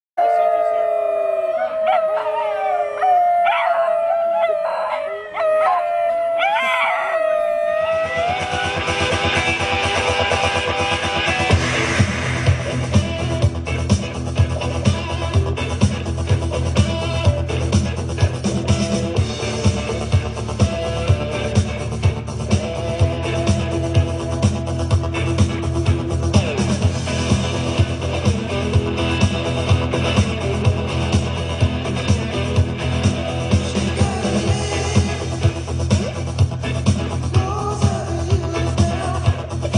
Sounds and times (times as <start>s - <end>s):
Speech: 0.2s - 1.3s
Howl: 0.2s - 9.2s
Music: 0.4s - 39.7s.